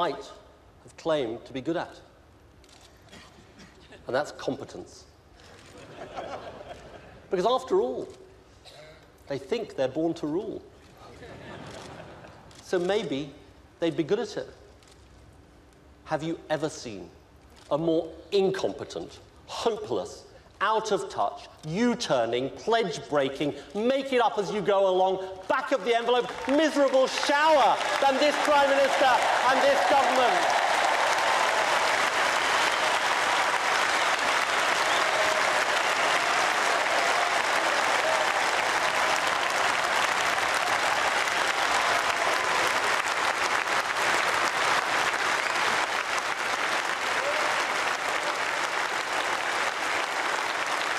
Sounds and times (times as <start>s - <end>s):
Male speech, man speaking: 0.0s - 2.0s, 4.1s - 5.1s, 7.3s - 8.2s, 9.3s - 10.7s, 12.7s - 14.6s, 16.1s - 17.1s, 17.7s - 30.5s.